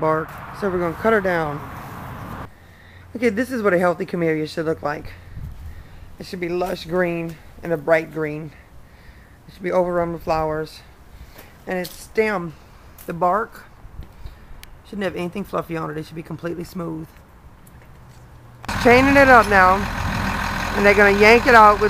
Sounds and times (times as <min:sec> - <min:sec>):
Speech: 0:00.0 - 0:01.6, 0:03.2 - 0:05.2, 0:06.2 - 0:08.6, 0:09.5 - 0:10.9, 0:11.7 - 0:13.7, 0:14.9 - 0:17.2, 0:18.8 - 0:19.8, 0:20.8 - 0:21.9.